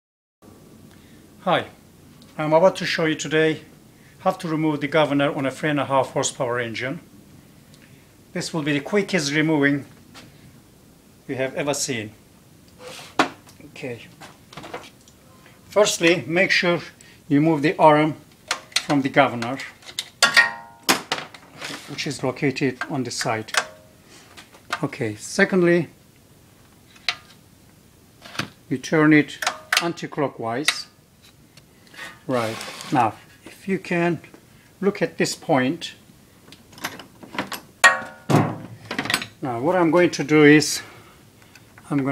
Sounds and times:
Speech: 1.4 - 1.8, 2.4 - 7.0, 8.3 - 9.9, 11.3 - 12.2, 13.6 - 14.2, 15.7 - 18.2, 18.9 - 19.8, 21.9 - 23.6, 24.7 - 26.0, 28.7 - 31.0, 32.3 - 36.0, 39.4 - 40.9, 41.8 - 42.1.

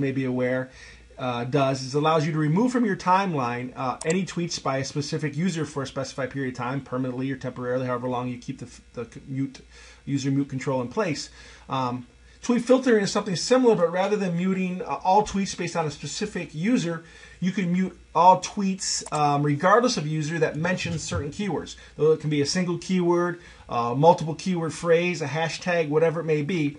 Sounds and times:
Speech: 0.0 - 26.7.

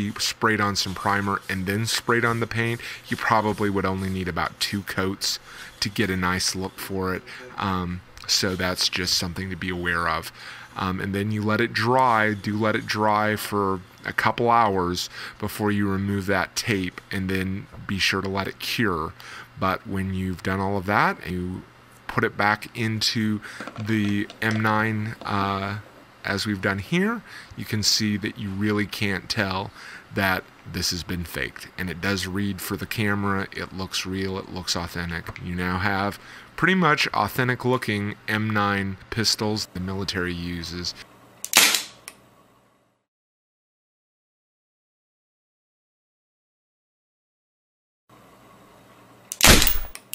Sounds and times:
Gunshot, gunfire: 41.6 - 41.9, 49.4 - 50.0.

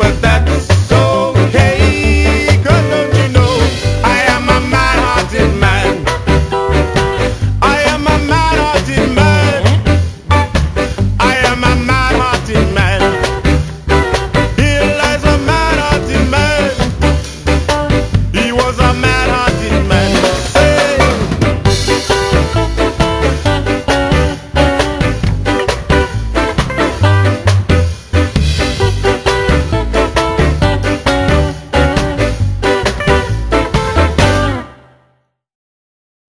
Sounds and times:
Ska: 0.0 - 35.2.

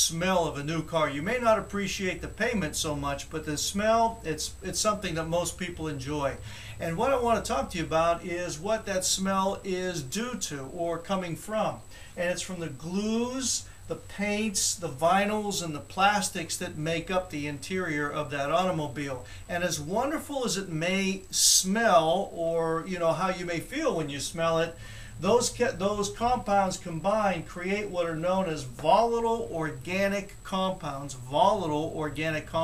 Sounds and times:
Speech: 0.0 - 32.6.

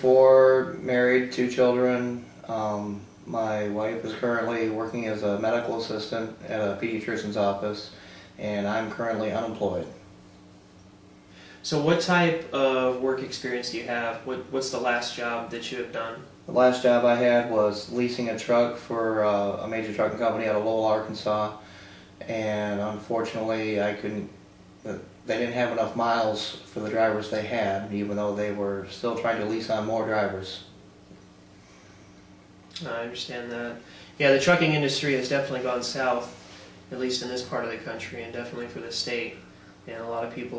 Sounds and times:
Speech: 0.0 - 10.0, 11.6 - 21.6, 22.2 - 30.7, 32.7 - 40.5.

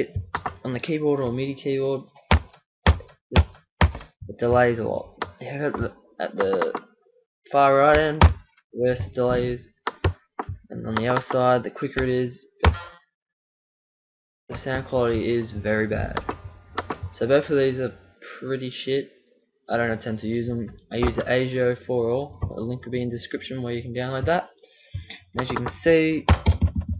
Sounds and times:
Speech: 0.0 - 2.1, 4.3 - 6.8, 7.5 - 9.7, 10.7 - 12.5, 14.5 - 16.2, 17.2 - 19.1, 19.7 - 24.5, 25.1 - 26.3.

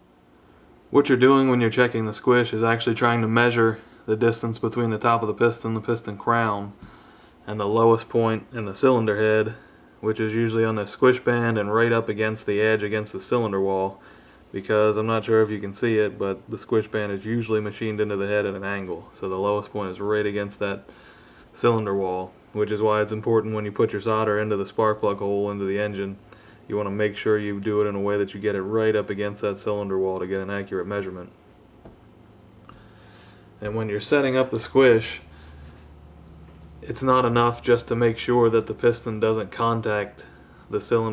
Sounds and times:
Speech: 0.9 - 6.8, 7.5 - 20.9, 21.6 - 31.4, 33.6 - 35.3, 36.8 - 41.1.

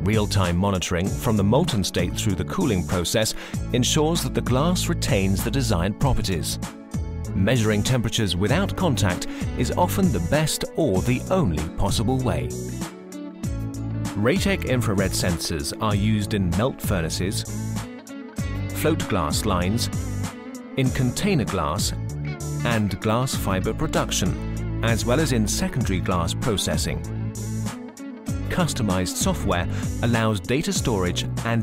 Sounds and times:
Speech: 0.0 - 6.6, 7.4 - 12.6, 14.2 - 17.5, 18.8 - 20.0, 20.8 - 22.0, 22.6 - 27.1, 28.5 - 31.6
Music: 0.0 - 31.6.

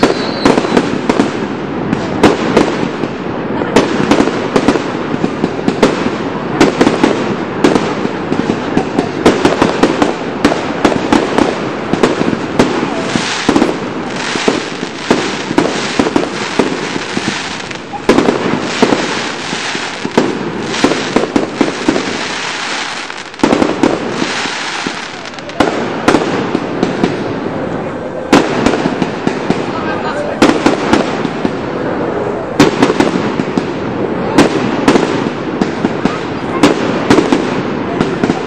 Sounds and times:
Fireworks: 0.0 - 38.4.

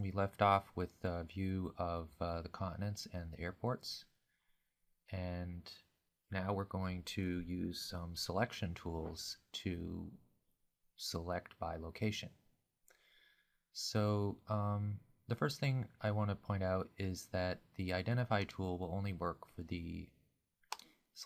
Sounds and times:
Speech: 0.0 - 4.1, 5.1 - 10.2, 11.0 - 12.4, 13.8 - 20.2.

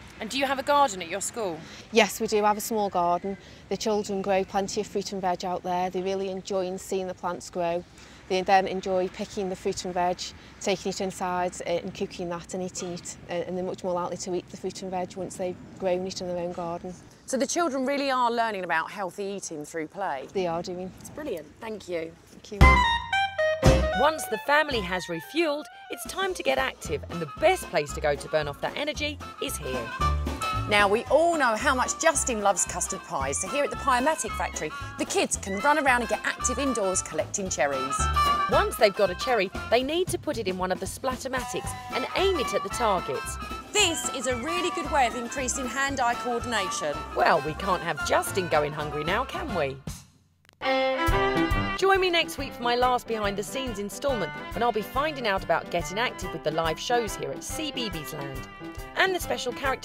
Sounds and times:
Music: 22.6 - 50.0, 50.6 - 59.8
Speech: 24.0 - 29.9, 30.7 - 50.0, 51.8 - 58.4, 59.0 - 59.8.

